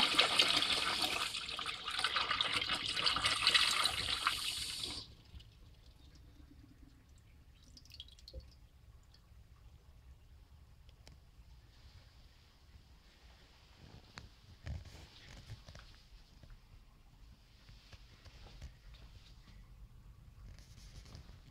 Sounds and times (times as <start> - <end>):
Toilet flush: 0.0 - 5.2.